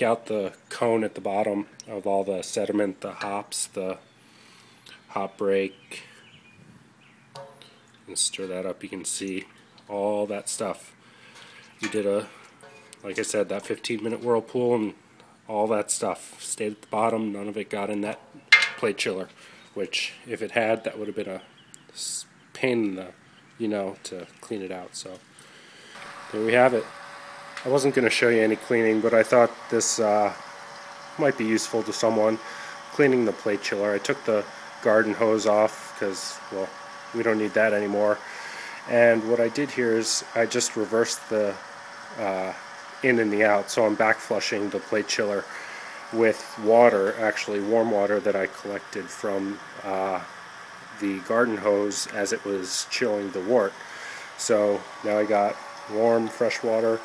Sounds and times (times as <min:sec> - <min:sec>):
Speech: 0:00.0 - 0:04.0, 0:05.1 - 0:06.1, 0:08.1 - 0:11.0, 0:11.8 - 0:12.3, 0:13.0 - 0:18.2, 0:18.8 - 0:25.2, 0:26.3 - 0:26.9, 0:27.6 - 0:30.4, 0:31.2 - 0:38.2, 0:38.8 - 0:41.6, 0:42.2 - 0:45.5, 0:46.1 - 0:50.3, 0:51.0 - 0:53.8, 0:54.4 - 0:57.0.